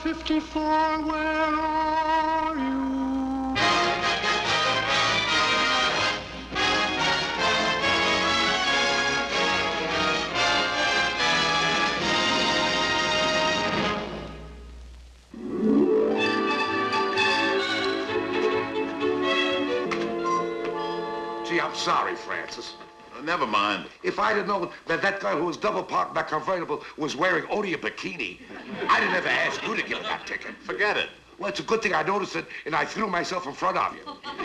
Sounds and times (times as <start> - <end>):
Music: 0.0 - 14.8, 15.4 - 23.6
Speech: 21.5 - 34.4.